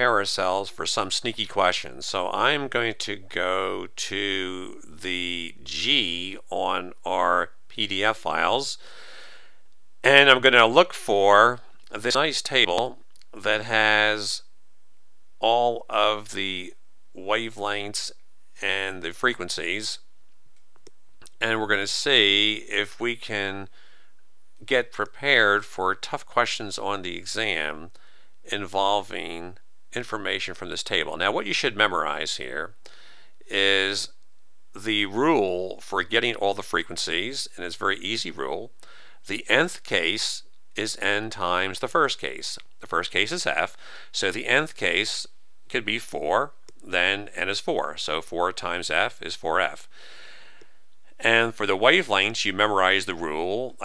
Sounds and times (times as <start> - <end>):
Speech: 0.0 - 8.8, 10.0 - 14.5, 15.4 - 20.0, 21.2 - 23.7, 24.6 - 27.9, 28.5 - 32.8, 33.5 - 34.1, 34.8 - 49.9, 51.2 - 53.8.